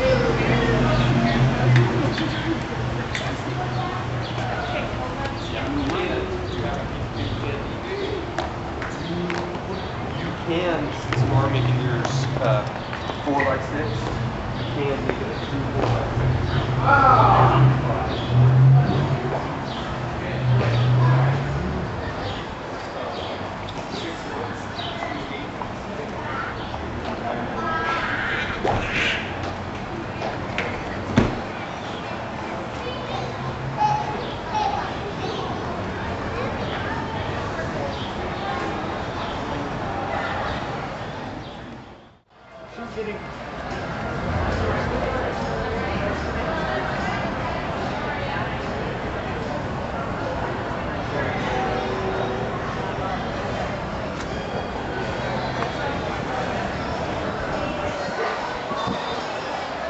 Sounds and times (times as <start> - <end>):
Speech: 0.0 - 28.4, 32.0 - 41.4, 42.4 - 59.8.